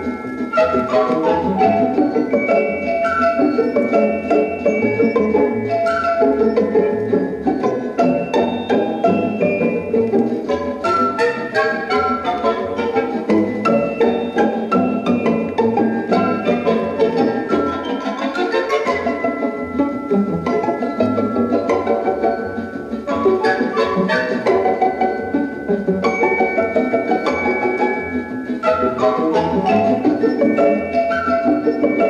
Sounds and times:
Music: 0:00.0 - 0:32.1.

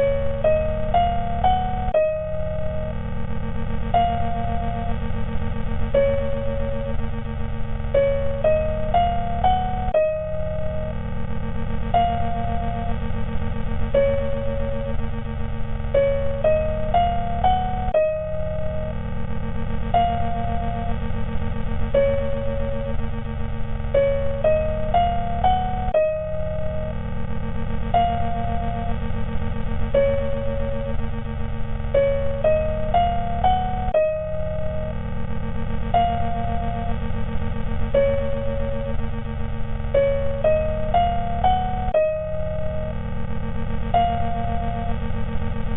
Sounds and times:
Music: 0:00.0 - 0:45.7.

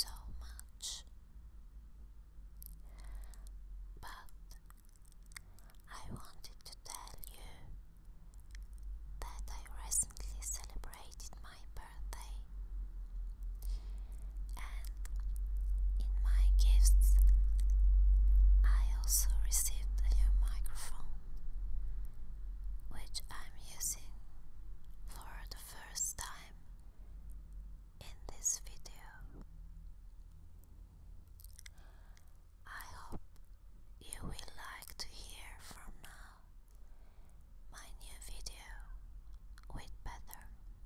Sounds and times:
Whispering: 0:00.0 - 0:01.2, 0:02.7 - 0:07.8, 0:09.2 - 0:12.5, 0:14.4 - 0:15.3, 0:16.0 - 0:17.7, 0:18.6 - 0:21.2, 0:22.9 - 0:24.2, 0:25.1 - 0:26.6, 0:28.0 - 0:29.5, 0:32.6 - 0:33.3, 0:34.0 - 0:36.6, 0:37.7 - 0:39.0, 0:39.6 - 0:40.6.

